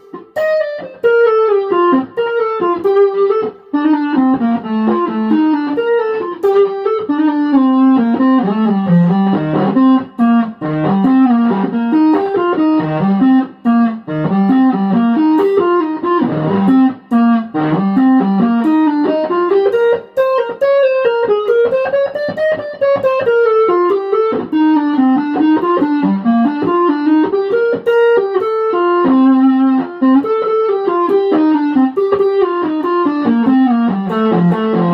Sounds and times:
Electric guitar: 0.0s - 34.9s
Bass guitar: 7.0s - 19.2s, 32.5s - 34.9s.

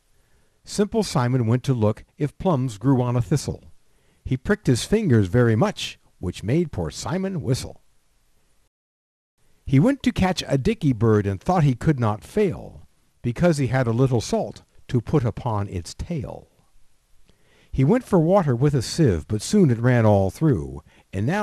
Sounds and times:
Speech: 0.7s - 3.7s, 4.3s - 7.8s, 9.7s - 16.6s, 17.8s - 21.4s.

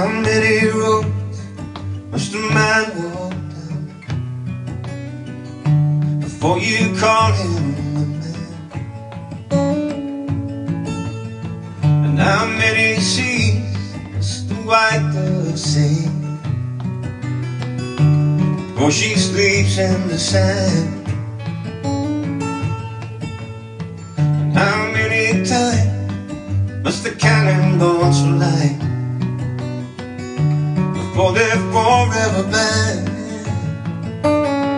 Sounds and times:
Music: 0.0s - 34.7s.

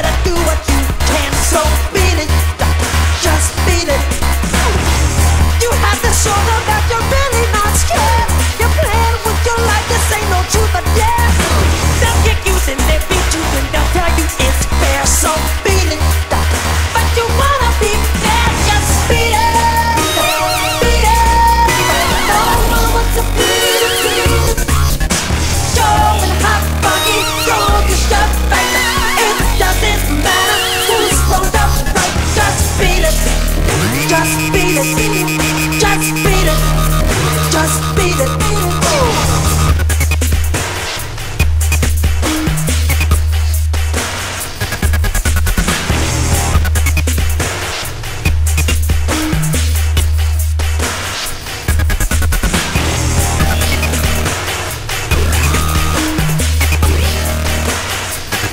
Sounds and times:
Dubstep: 0.0s - 58.5s
Electronica: 17.8s - 40.7s, 52.8s - 58.2s
Sampler: 18.2s - 40.3s, 53.2s - 54.5s, 55.1s - 58.0s.

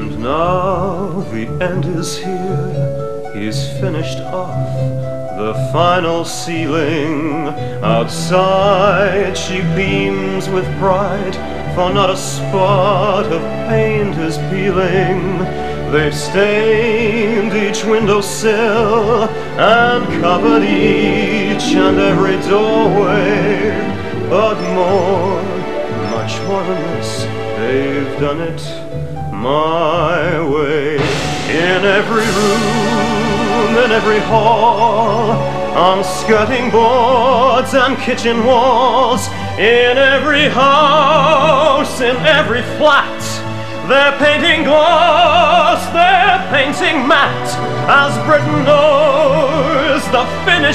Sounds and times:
Male singing: 0.0s - 4.7s, 5.4s - 50.7s
Music: 0.0s - 50.7s.

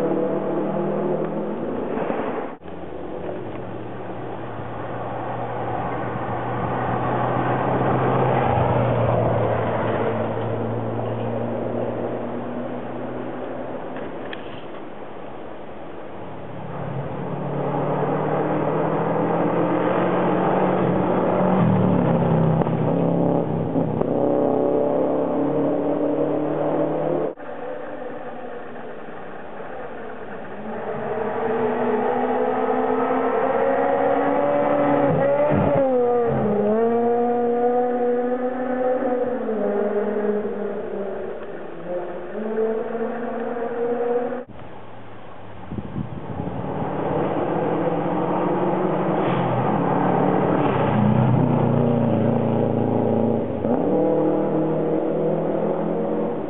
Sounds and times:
Race car, auto racing: 0.0s - 56.5s.

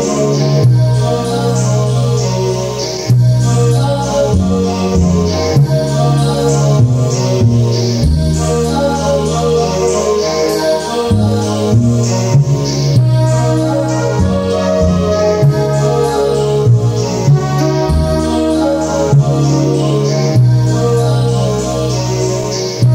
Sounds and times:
Music: 0.0s - 22.9s.

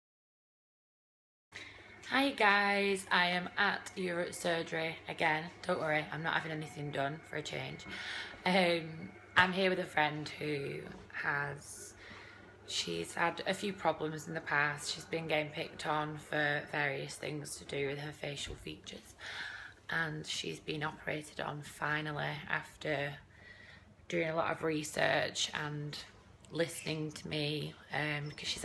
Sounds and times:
Speech: 2.1s - 12.0s, 12.7s - 19.2s, 19.9s - 23.2s, 24.1s - 28.6s.

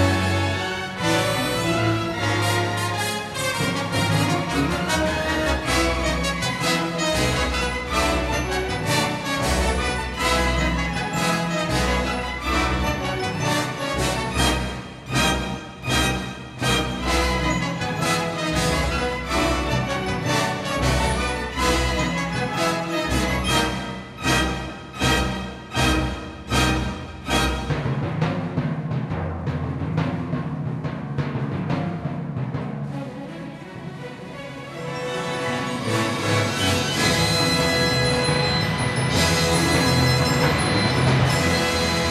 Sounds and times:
Classical music: 0.0s - 28.6s, 32.8s - 42.1s
Bowed string instrument: 0.0s - 42.1s
Orchestra: 0.0s - 42.1s
Timpani: 0.0s - 42.1s.

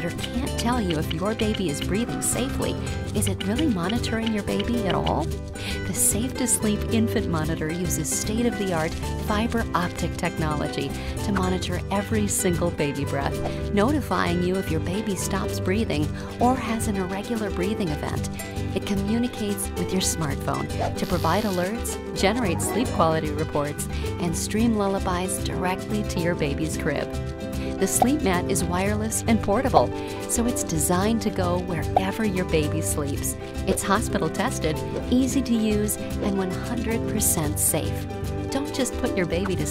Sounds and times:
Speech: 0.0s - 27.1s, 27.8s - 39.7s
Music: 0.0s - 39.7s.

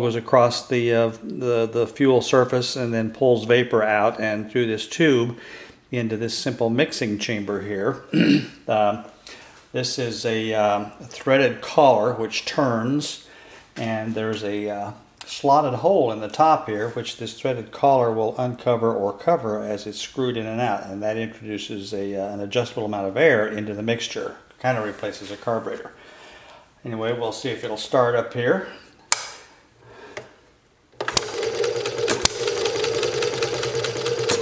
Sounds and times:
Speech: 0.0s - 9.1s, 9.7s - 26.0s, 26.8s - 28.8s.

